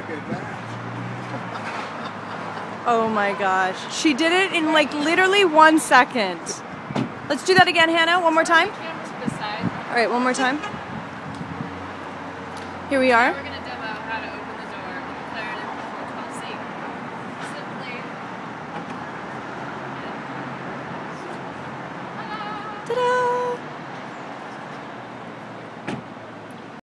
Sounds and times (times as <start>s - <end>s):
Vehicle: 0.0s - 26.8s.